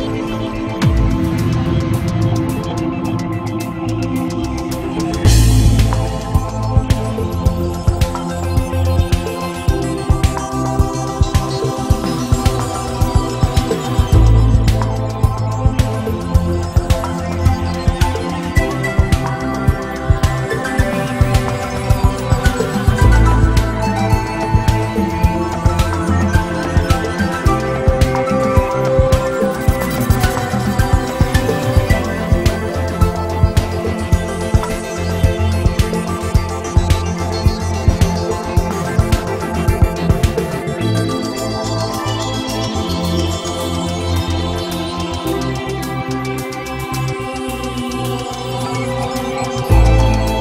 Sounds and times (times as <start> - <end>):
Music: 0.0 - 50.4.